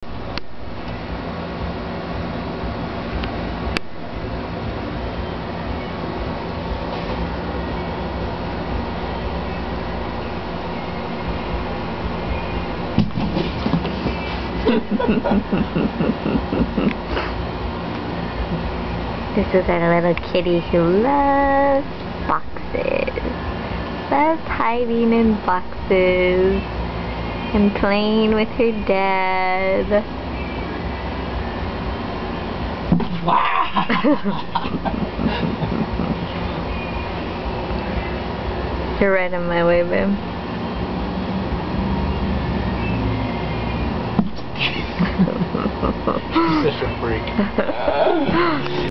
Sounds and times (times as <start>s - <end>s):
Speech: 19.4s - 23.3s, 24.2s - 26.6s, 27.6s - 30.0s, 39.0s - 40.2s, 46.4s - 48.9s.